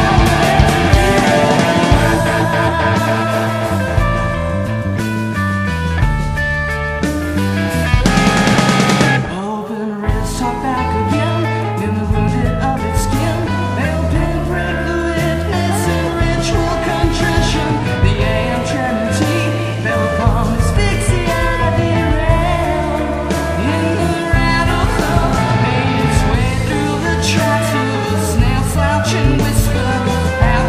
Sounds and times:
Singing: 0.0 - 4.7, 9.3 - 30.6
Music: 0.0 - 30.6.

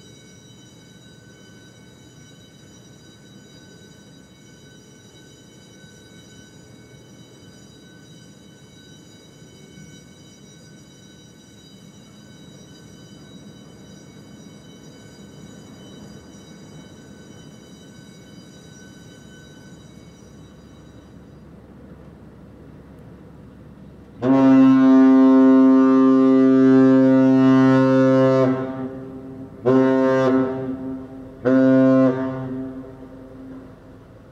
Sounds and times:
Outside, urban or manmade: 0.0 - 34.3
Foghorn: 24.2 - 34.3.

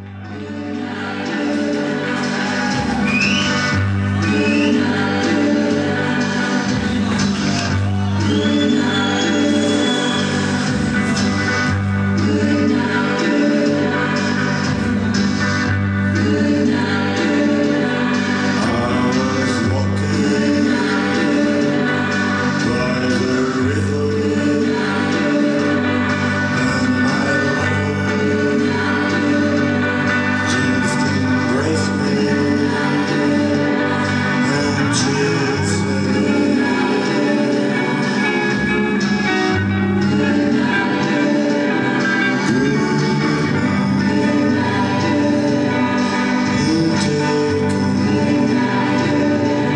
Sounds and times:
Music: 0.0 - 49.7.

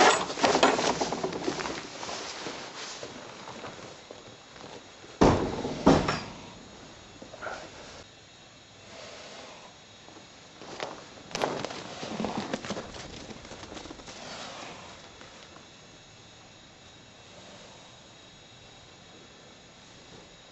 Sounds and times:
Animal: 11.4 - 15.5, 17.3 - 18.1.

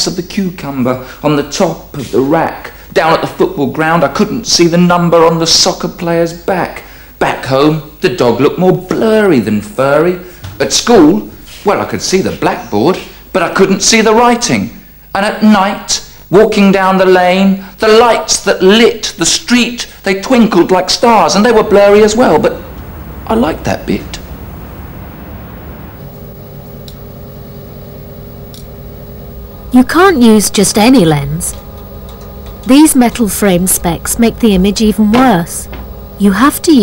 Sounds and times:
Speech: 0.0 - 22.6, 29.8 - 31.6, 32.7 - 36.8.

